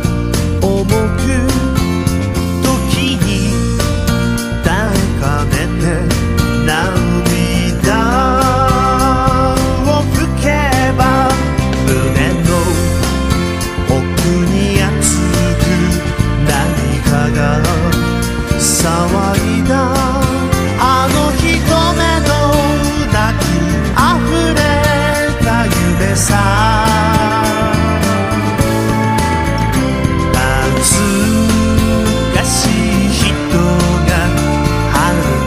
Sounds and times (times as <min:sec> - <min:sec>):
Music: 0:00.0 - 0:35.4.